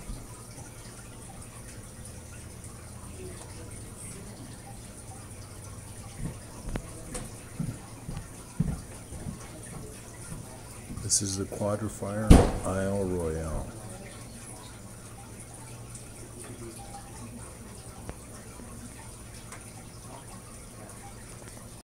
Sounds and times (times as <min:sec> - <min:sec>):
Speech: 0:11.0 - 0:14.3.